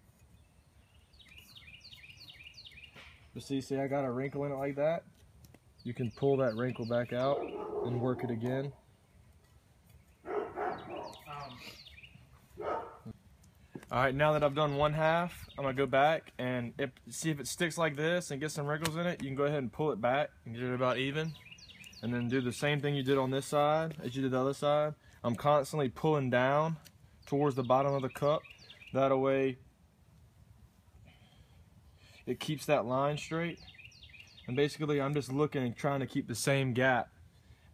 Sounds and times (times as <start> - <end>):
Outside, rural or natural: 0.0 - 37.7
Speech: 3.4 - 5.1, 5.9 - 8.8, 11.3 - 11.7, 13.9 - 21.4, 22.0 - 28.4, 29.0 - 29.6, 32.3 - 33.6, 34.5 - 37.1.